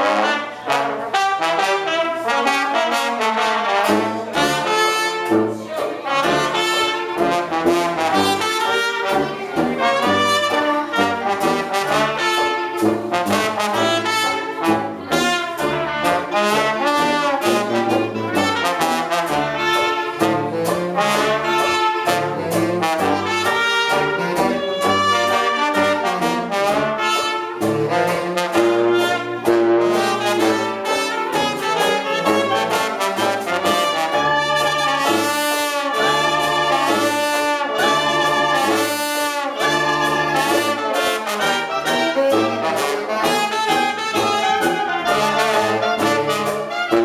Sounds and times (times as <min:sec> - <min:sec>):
Music: 0:00.0 - 0:47.0.